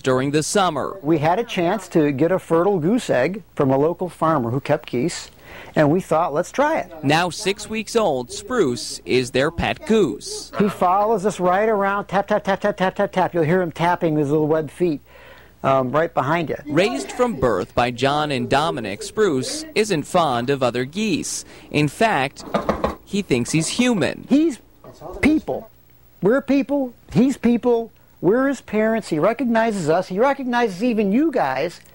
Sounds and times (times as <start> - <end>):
Speech: 0.0 - 15.0, 15.6 - 22.4, 23.1 - 31.8.